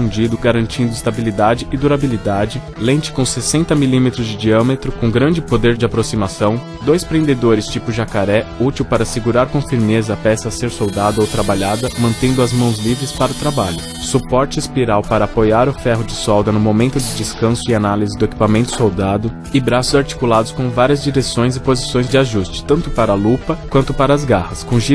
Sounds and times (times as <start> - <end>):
Music: 0.0 - 24.9
Speech: 0.0 - 24.9.